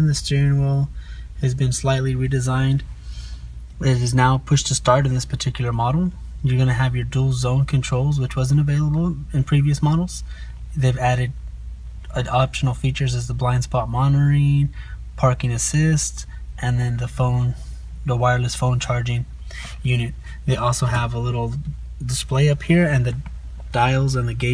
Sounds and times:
Speech: 0.0s - 2.9s, 3.8s - 11.4s, 12.1s - 24.5s.

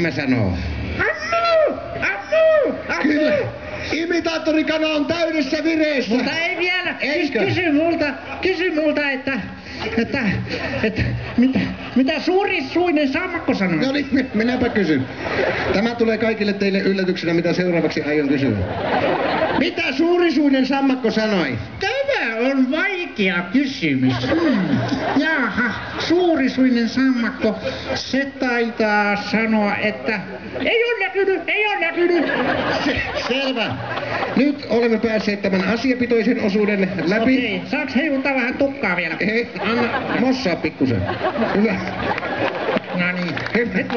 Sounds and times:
Speech: 0.0s - 15.1s, 19.6s - 33.8s, 34.4s - 42.0s, 42.9s - 43.9s.

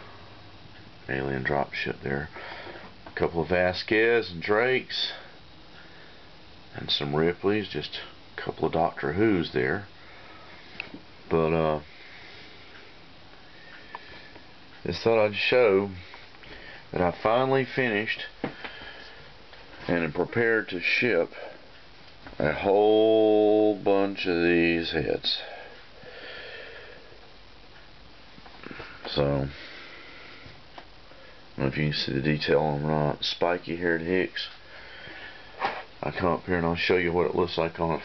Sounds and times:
Speech: 1.1s - 2.4s, 3.2s - 5.4s, 6.7s - 9.9s, 11.3s - 11.9s, 14.8s - 16.1s, 16.9s - 18.4s, 19.8s - 21.5s, 22.4s - 25.6s, 29.1s - 29.6s, 31.6s - 34.6s, 36.0s - 38.0s.

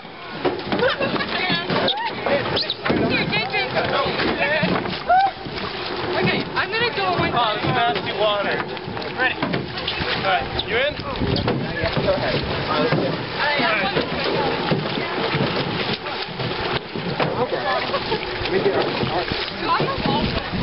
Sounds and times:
Rowboat, canoe, kayak: 0.0s - 20.6s.

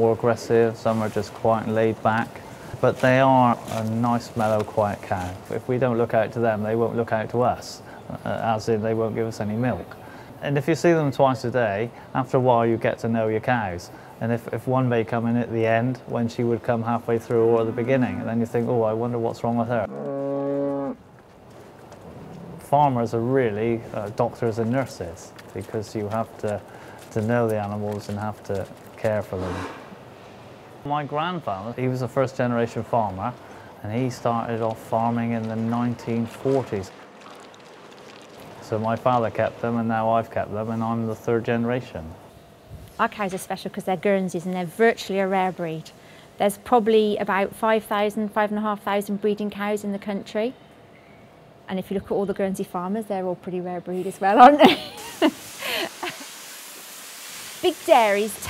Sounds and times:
Speech: 0.0s - 19.9s, 38.6s - 42.2s, 57.6s - 58.4s.

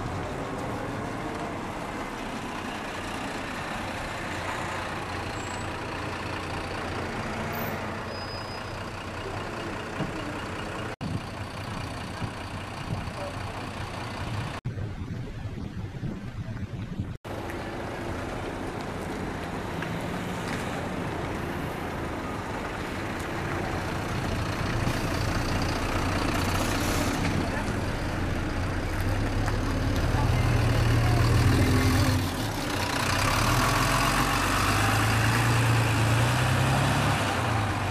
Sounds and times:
Bus: 0.0s - 37.9s
Speech: 13.0s - 13.8s, 27.3s - 28.1s, 29.4s - 31.9s.

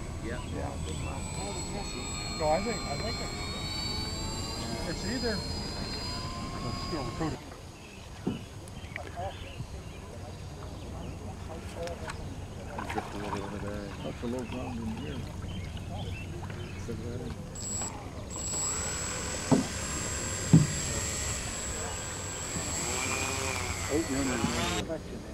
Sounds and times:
Boat, Water vehicle: 0.0s - 21.0s, 23.2s - 25.3s
Outside, rural or natural: 0.0s - 25.3s
Speech: 8.4s - 17.4s, 23.9s - 25.3s.

